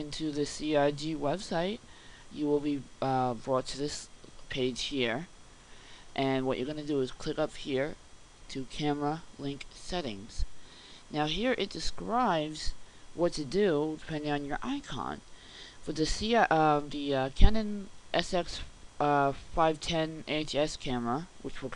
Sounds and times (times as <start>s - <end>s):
Speech: 0.0s - 5.3s, 6.2s - 10.5s, 11.1s - 15.2s, 15.8s - 21.7s.